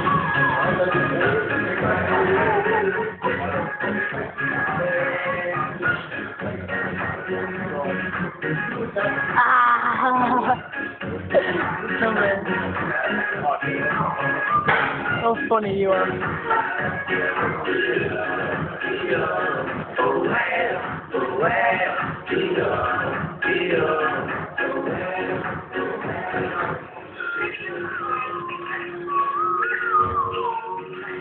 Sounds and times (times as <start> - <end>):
Male singing: 0.0 - 31.2
Music: 0.0 - 31.2
Synthetic singing: 0.0 - 31.2.